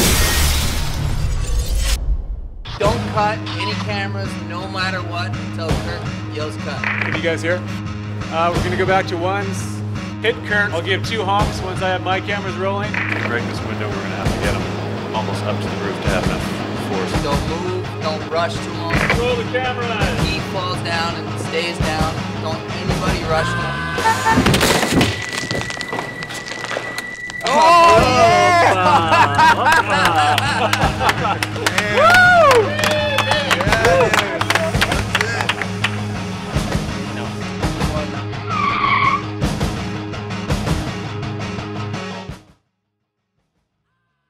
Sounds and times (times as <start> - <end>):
Music: 0.0 - 44.3.